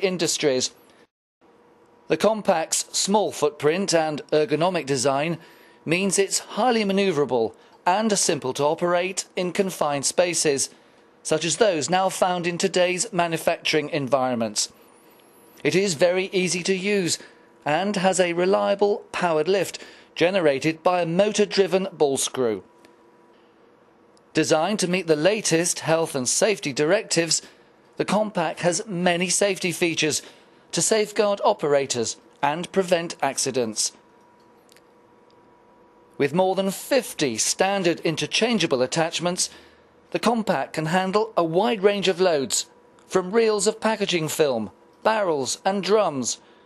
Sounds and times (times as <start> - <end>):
Speech: 0.0 - 0.8, 2.1 - 14.8, 15.6 - 22.7, 24.4 - 34.0, 36.2 - 39.5, 40.1 - 46.4.